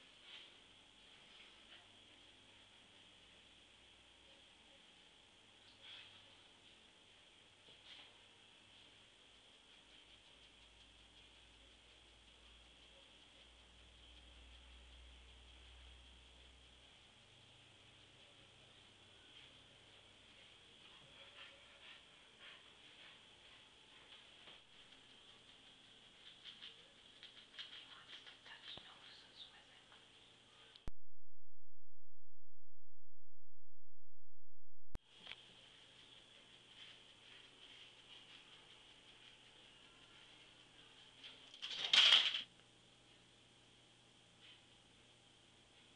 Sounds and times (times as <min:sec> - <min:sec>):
Speech: 0:26.6 - 0:30.9.